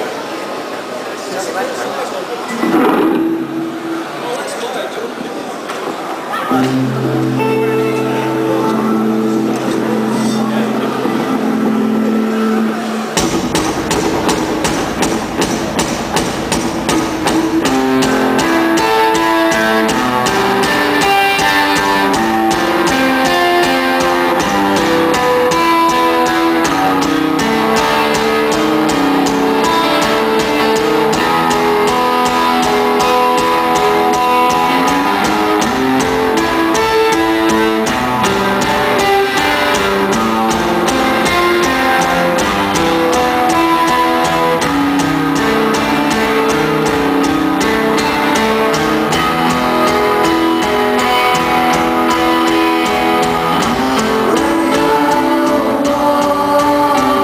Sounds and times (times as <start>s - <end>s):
Music: 6.4s - 57.2s.